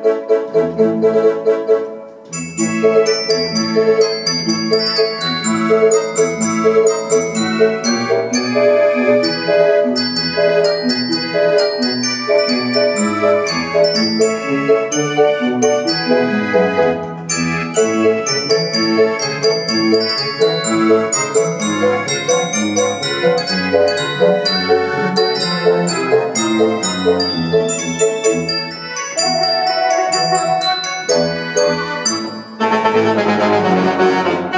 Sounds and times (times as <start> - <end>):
Classical music: 0.0 - 34.5
Piano: 0.0 - 34.5.